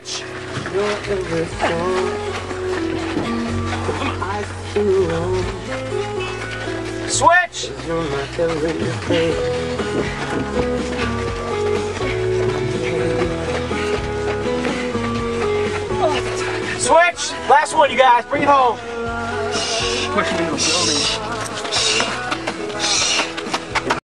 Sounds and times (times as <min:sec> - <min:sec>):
Music: 0:00.0 - 0:24.0
Speech: 0:20.2 - 0:21.2.